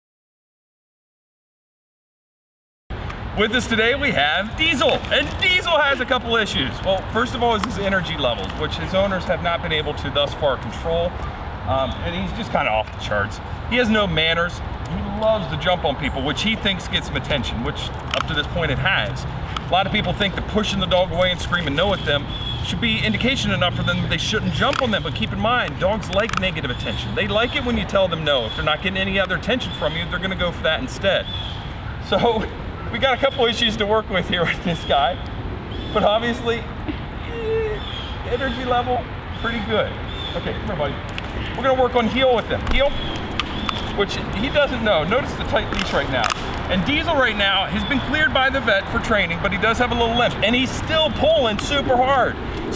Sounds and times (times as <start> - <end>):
Speech: 3.4 - 31.3, 32.0 - 35.2, 35.9 - 36.7, 37.3 - 41.0, 41.6 - 43.0, 44.0 - 52.4.